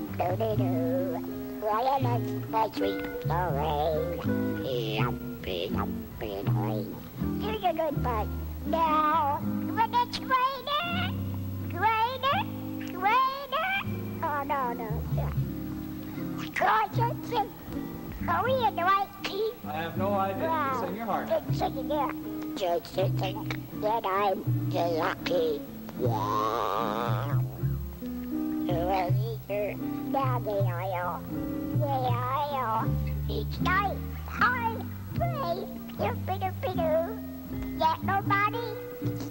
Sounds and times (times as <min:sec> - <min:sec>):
Music: 0:00.0 - 0:39.3
Speech: 0:00.2 - 0:11.0, 0:13.0 - 0:15.4, 0:18.3 - 0:27.4, 0:28.7 - 0:31.2, 0:31.8 - 0:37.2.